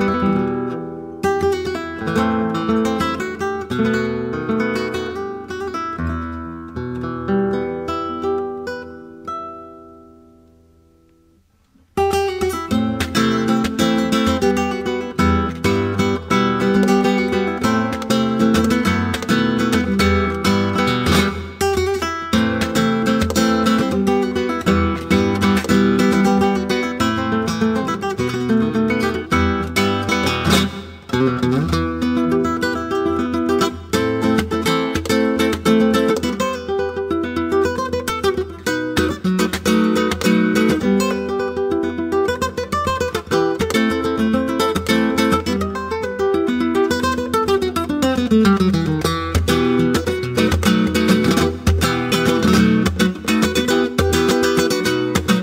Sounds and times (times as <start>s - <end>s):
Plucked string instrument: 12.0s - 55.4s.